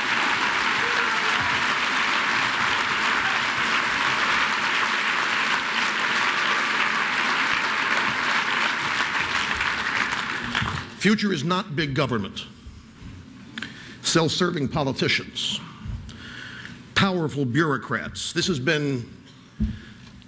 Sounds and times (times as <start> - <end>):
Male speech, man speaking: 11.0 - 12.5, 14.0 - 15.6, 17.0 - 19.1
Narration, monologue: 11.0 - 20.1.